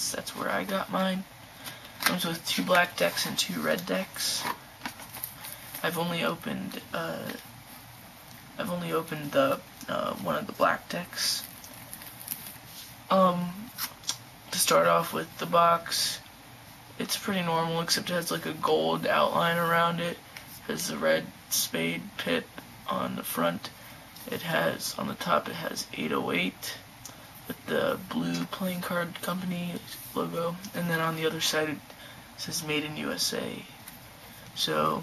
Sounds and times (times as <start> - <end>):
Speech: 0.0 - 1.3, 2.1 - 4.6, 5.8 - 7.4, 8.6 - 11.5, 13.1 - 13.9, 14.5 - 16.2, 17.0 - 26.8, 27.5 - 33.8, 34.6 - 35.0.